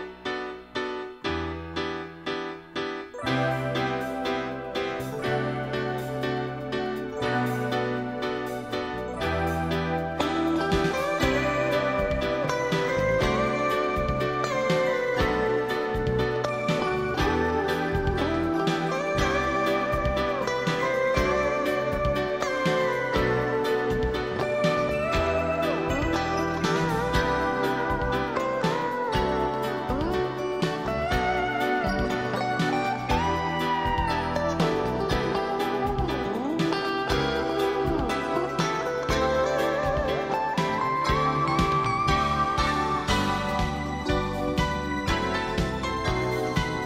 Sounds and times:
Music: 0.0s - 46.8s.

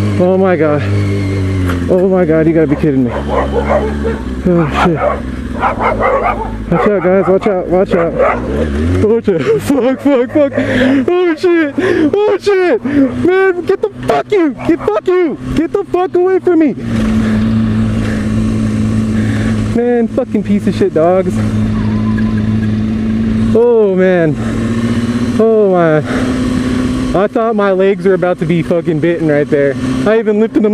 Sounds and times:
Motorcycle: 0.0s - 30.7s
Bow-wow: 2.8s - 8.7s, 14.6s - 15.0s.

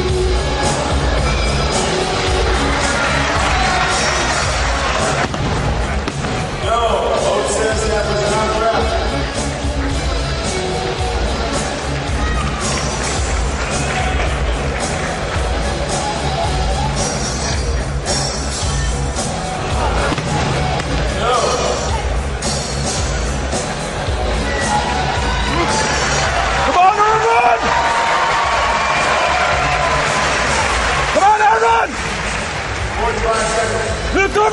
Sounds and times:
Music: 0.0s - 34.5s.

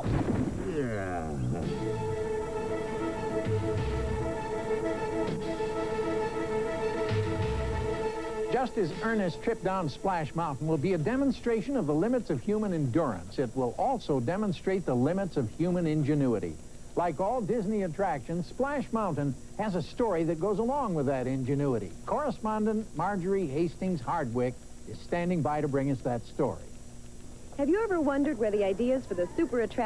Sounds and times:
Speech: 0.6s - 1.8s, 8.6s - 26.7s, 27.6s - 29.8s.

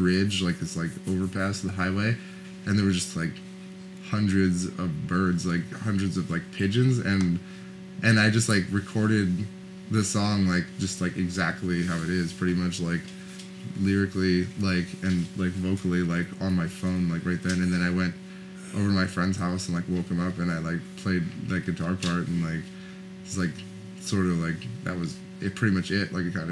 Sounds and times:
Speech: 0.0s - 3.4s, 4.0s - 7.4s, 8.0s - 22.7s, 23.3s - 26.5s.

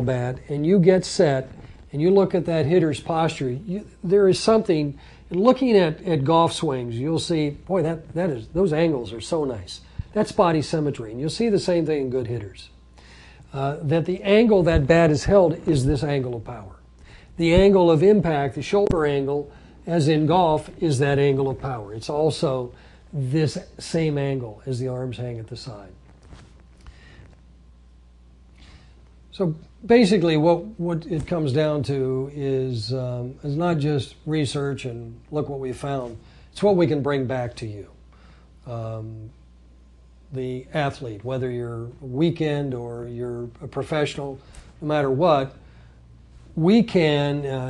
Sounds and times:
Speech: 0.0s - 12.8s, 13.5s - 26.0s, 29.3s - 38.0s, 38.6s - 39.4s, 40.3s - 45.6s, 46.6s - 47.6s.

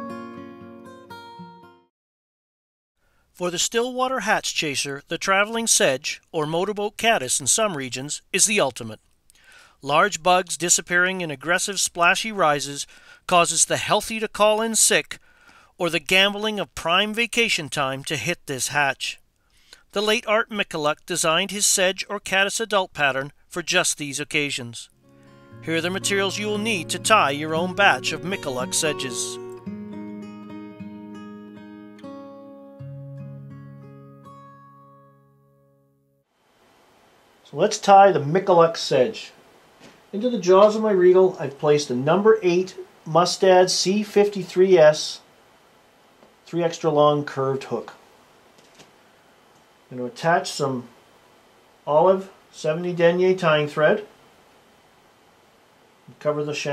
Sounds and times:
Music: 0.0s - 1.9s, 25.0s - 36.2s
Speech: 3.4s - 9.0s, 9.8s - 15.2s, 15.8s - 19.2s, 19.9s - 24.9s, 25.7s - 29.4s, 37.5s - 39.4s, 40.2s - 45.3s, 46.5s - 48.0s, 49.9s - 51.0s, 51.9s - 54.1s, 56.1s - 56.7s.

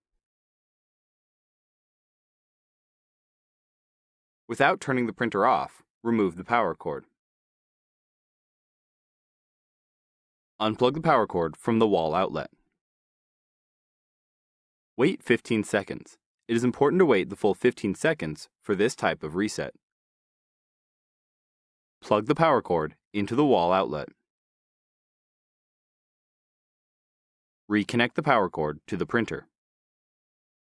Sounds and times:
Speech: 4.5s - 7.1s, 10.6s - 12.6s, 15.0s - 19.8s, 22.0s - 24.2s, 27.7s - 29.6s.

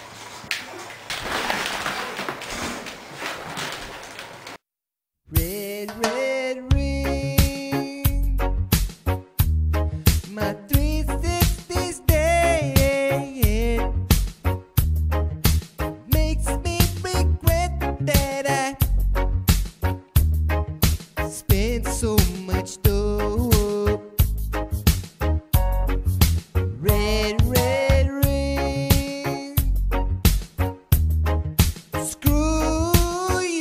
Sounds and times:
Music: 5.3s - 33.6s.

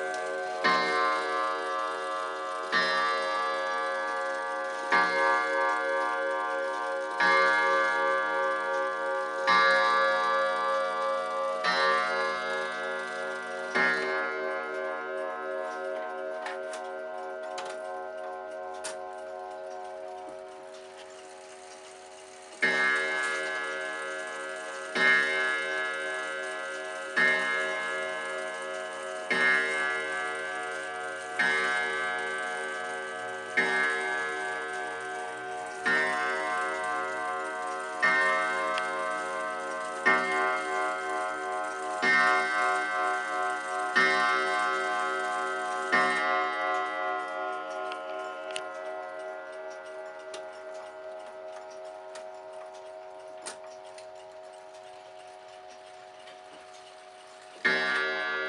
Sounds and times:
Tick-tock: 0.0s - 58.4s.

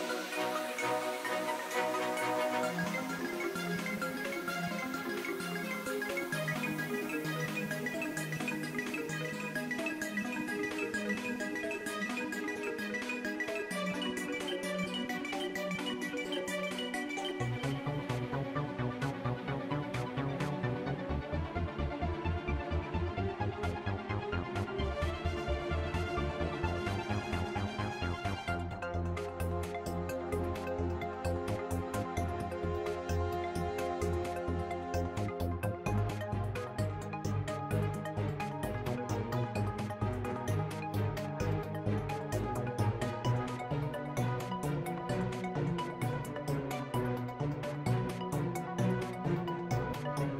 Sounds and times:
Music: 0.0s - 50.3s.

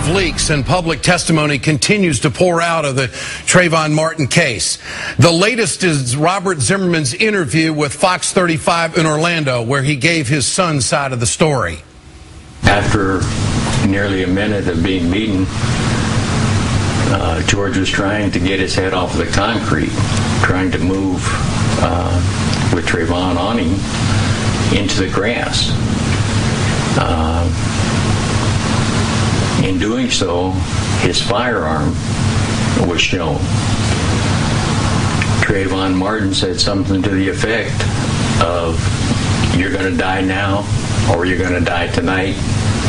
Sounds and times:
Speech: 0.0s - 11.9s, 12.6s - 15.6s, 17.0s - 23.8s, 24.7s - 25.8s, 27.0s - 27.6s, 29.6s - 32.0s, 32.8s - 33.5s, 35.4s - 38.9s, 39.5s - 42.4s.

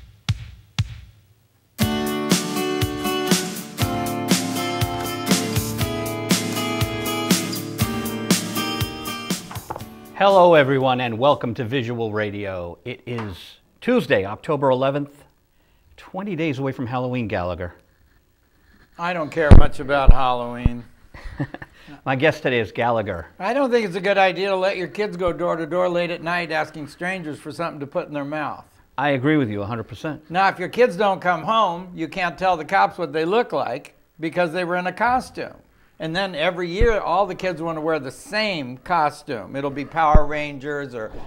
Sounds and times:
Speech: 10.2s - 15.3s, 16.0s - 17.8s, 19.0s - 20.9s, 22.1s - 41.2s.

